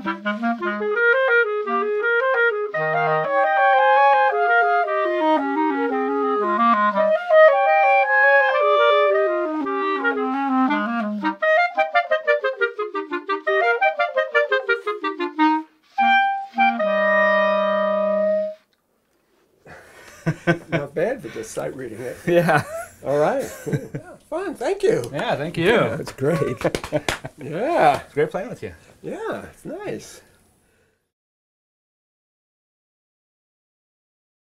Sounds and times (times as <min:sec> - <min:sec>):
Clarinet: 0:00.0 - 0:18.8.